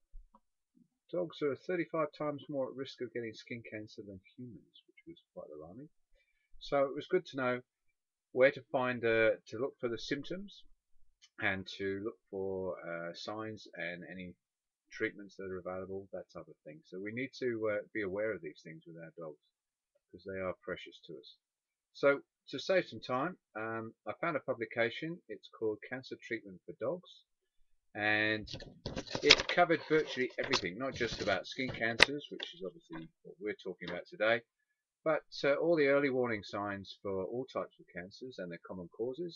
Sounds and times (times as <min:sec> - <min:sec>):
Speech: 0:01.1 - 0:06.0, 0:06.6 - 0:07.7, 0:08.4 - 0:10.7, 0:11.4 - 0:19.4, 0:20.1 - 0:21.4, 0:22.0 - 0:27.3, 0:28.0 - 0:39.3.